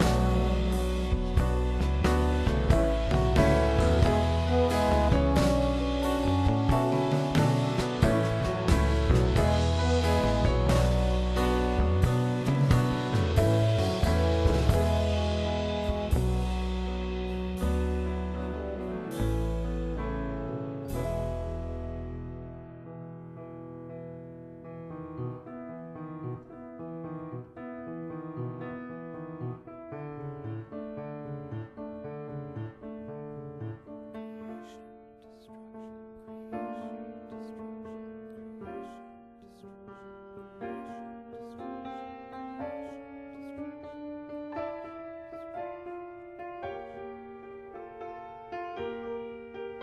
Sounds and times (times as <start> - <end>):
Piano: 0.0 - 49.8.